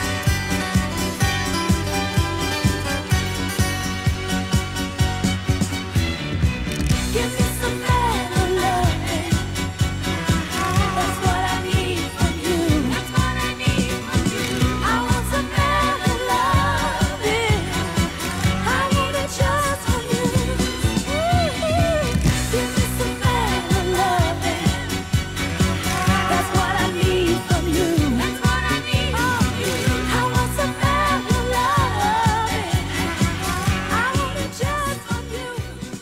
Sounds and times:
Funk: 0:00.0 - 0:36.0
Singing: 0:07.1 - 0:36.0.

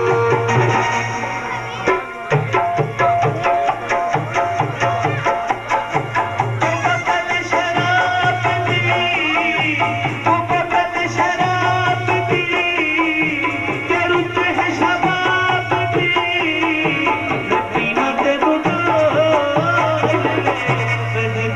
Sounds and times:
Middle Eastern music: 0:00.0 - 0:21.5.

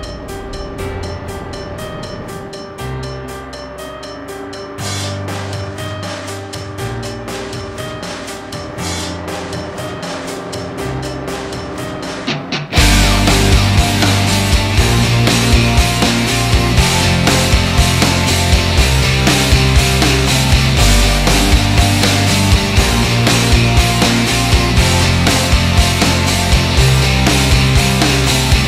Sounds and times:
Music: 0:00.0 - 0:28.6.

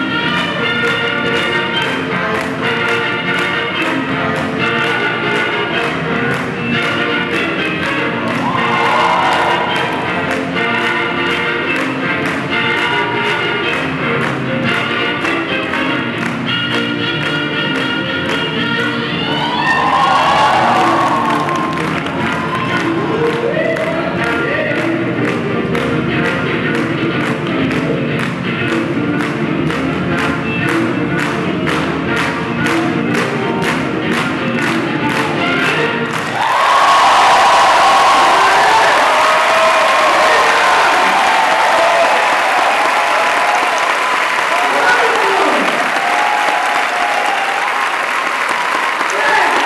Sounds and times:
Applause: 0:08.2 - 0:18.4, 0:19.4 - 0:25.4, 0:33.2 - 0:49.6.

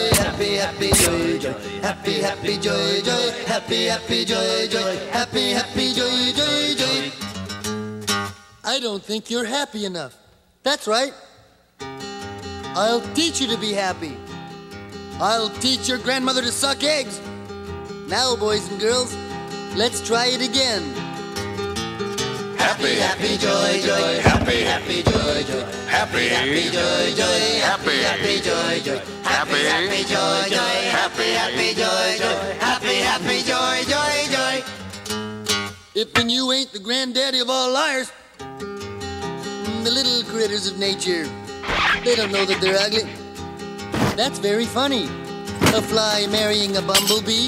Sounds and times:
Music: 0:00.0 - 0:08.6, 0:11.8 - 0:36.4, 0:38.4 - 0:47.4.

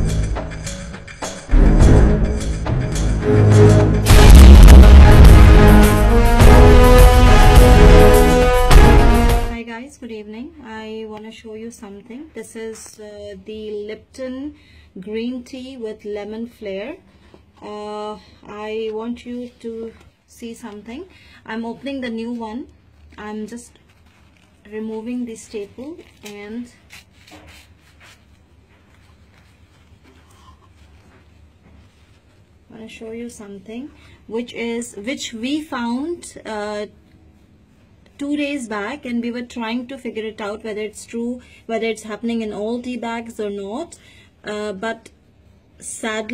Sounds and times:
Speech: 0:09.6 - 0:17.0, 0:17.6 - 0:23.8, 0:24.6 - 0:26.8, 0:32.7 - 0:37.0, 0:38.2 - 0:45.2, 0:45.8 - 0:46.3.

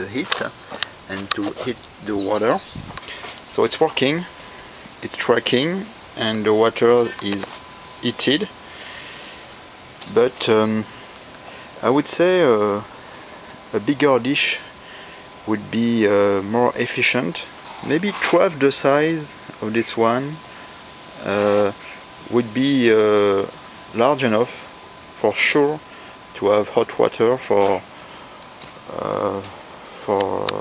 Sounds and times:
Speech: 0:00.0 - 0:02.8, 0:03.5 - 0:04.3, 0:05.0 - 0:08.5, 0:10.0 - 0:10.9, 0:11.8 - 0:12.9, 0:13.7 - 0:14.7, 0:15.5 - 0:20.4, 0:21.2 - 0:25.8, 0:26.4 - 0:27.9, 0:28.9 - 0:30.6.

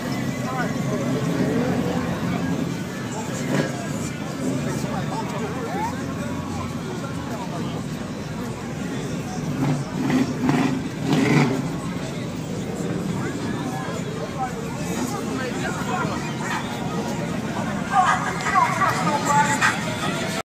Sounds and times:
Speech: 0:00.0 - 0:20.4.

